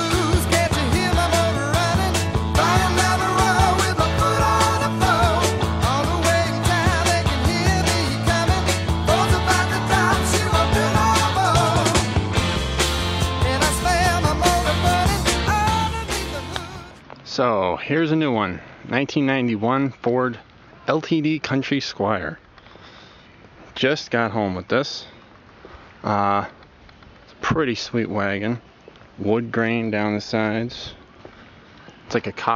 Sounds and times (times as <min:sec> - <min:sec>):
Speech: 0:17.3 - 0:22.4, 0:23.8 - 0:25.2, 0:26.0 - 0:26.5, 0:27.4 - 0:28.6, 0:29.2 - 0:31.0, 0:32.1 - 0:32.5.